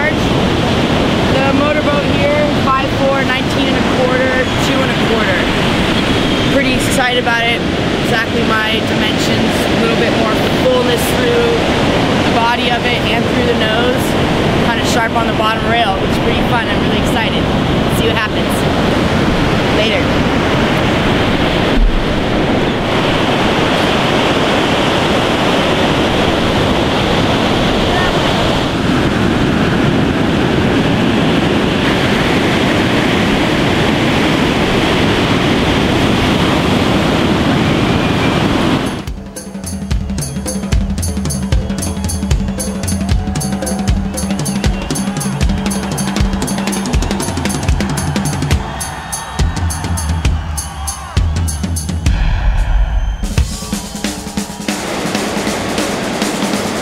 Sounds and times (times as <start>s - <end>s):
Waves, surf: 0.0s - 56.8s
Speech: 1.3s - 5.5s, 6.5s - 11.7s, 12.3s - 18.7s, 19.7s - 20.1s, 27.7s - 28.4s.